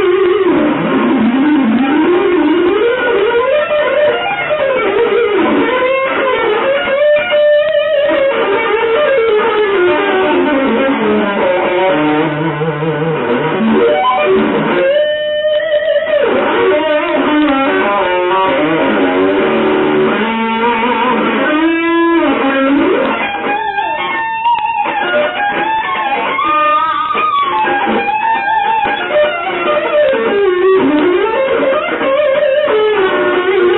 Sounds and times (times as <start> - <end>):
Bass guitar: 0.0 - 33.7
Electric guitar: 0.0 - 33.7.